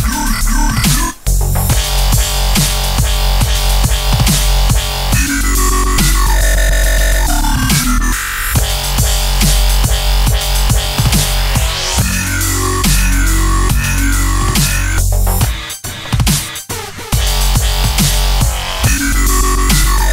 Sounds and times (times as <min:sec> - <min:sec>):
Music: 0:00.0 - 0:20.1.